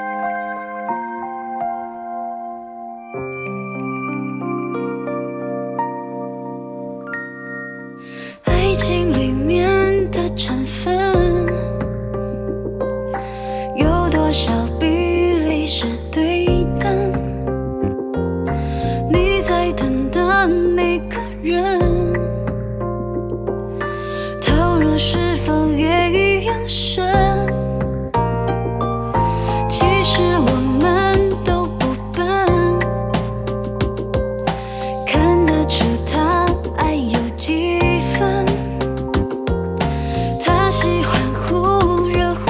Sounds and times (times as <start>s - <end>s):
Music: 0.0s - 42.4s.